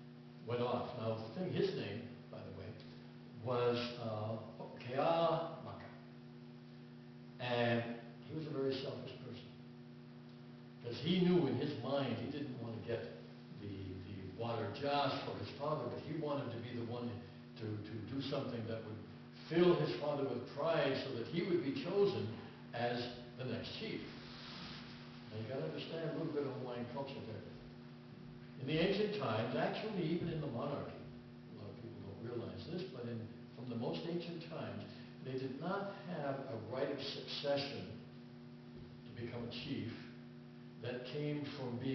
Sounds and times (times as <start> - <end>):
Speech: 0.4 - 2.8, 3.4 - 6.0, 7.4 - 9.6, 10.8 - 24.2, 25.3 - 27.6, 28.6 - 38.1, 39.0 - 40.2, 40.8 - 41.9.